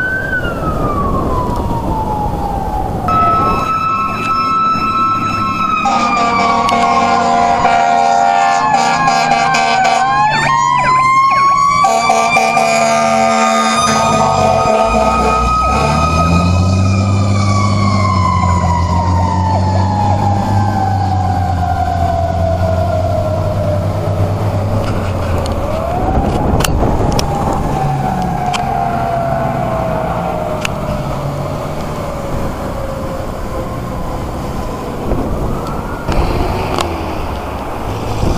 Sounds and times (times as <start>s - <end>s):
Car: 13.2s - 38.3s.